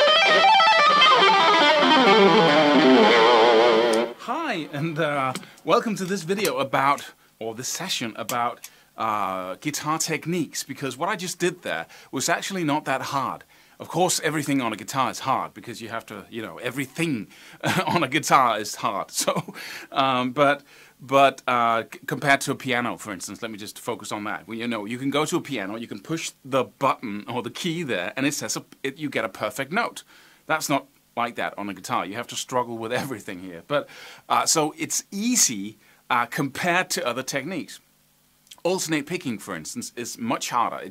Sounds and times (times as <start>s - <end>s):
Speech: 4.2s - 37.8s, 38.5s - 40.9s.